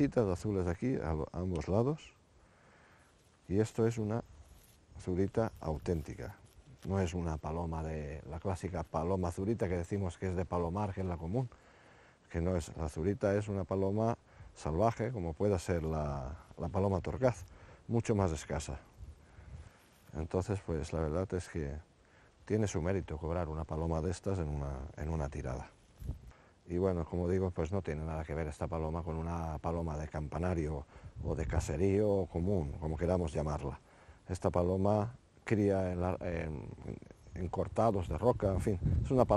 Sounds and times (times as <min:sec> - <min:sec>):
Speech: 0:00.0 - 0:02.2, 0:03.5 - 0:04.3, 0:05.0 - 0:11.6, 0:12.3 - 0:18.9, 0:20.1 - 0:25.8, 0:26.7 - 0:39.3.